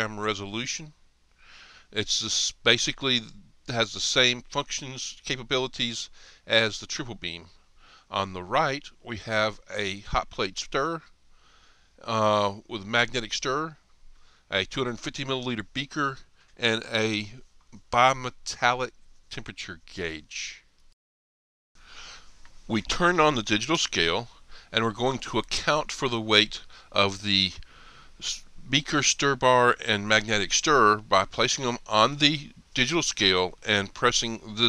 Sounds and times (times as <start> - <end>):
Speech: 0.0 - 1.0, 1.9 - 11.1, 12.0 - 13.8, 14.5 - 20.7, 22.7 - 27.6, 28.2 - 34.6.